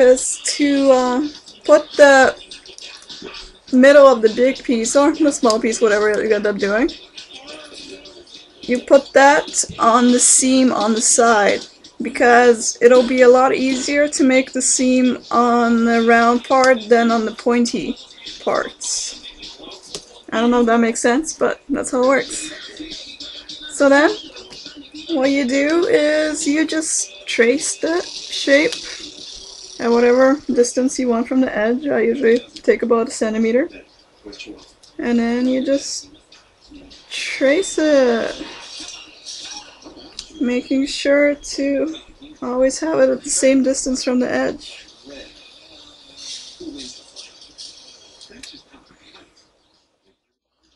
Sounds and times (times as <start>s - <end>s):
Speech: 0.0s - 49.4s.